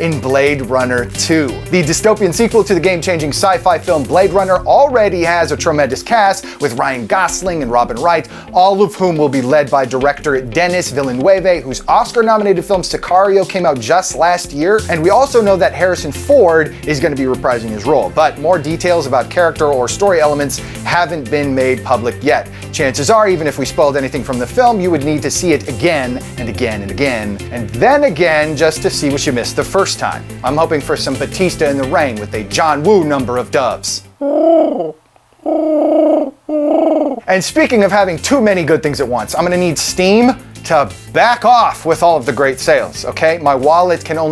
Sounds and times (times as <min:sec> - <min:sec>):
Speech: 0:00.0 - 0:34.1, 0:37.3 - 0:44.3
Music: 0:00.0 - 0:34.2, 0:37.3 - 0:44.3.